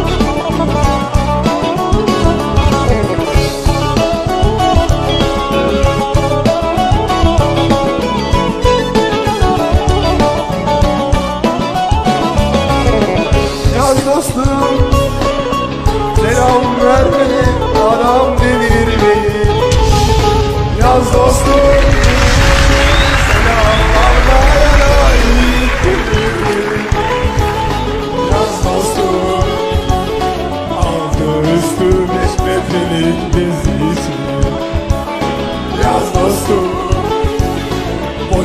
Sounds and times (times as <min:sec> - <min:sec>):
Music: 0:00.0 - 0:38.4
Male singing: 0:12.7 - 0:15.1, 0:16.1 - 0:19.8, 0:20.8 - 0:27.3, 0:28.1 - 0:34.8, 0:35.7 - 0:37.5, 0:38.2 - 0:38.4.